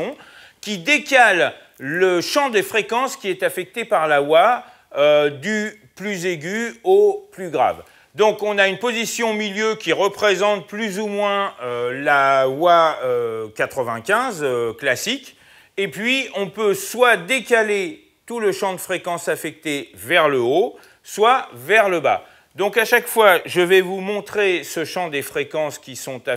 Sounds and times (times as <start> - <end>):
Speech: 0.0 - 26.3.